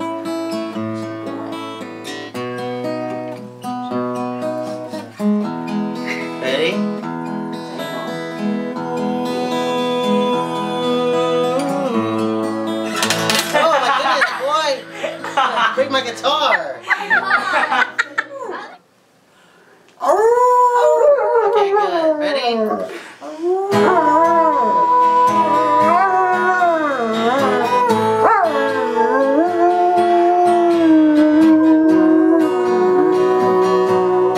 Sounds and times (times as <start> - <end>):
Acoustic guitar: 0.0 - 19.9, 22.8 - 34.3
Whimper (dog): 20.0 - 34.3
Speech: 21.6 - 22.8.